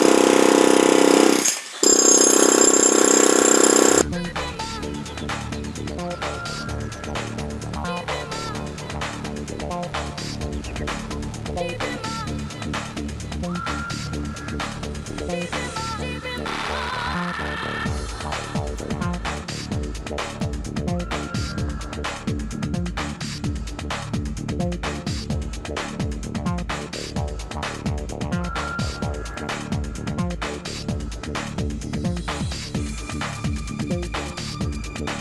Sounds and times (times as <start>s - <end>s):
Music: 4.0s - 35.2s.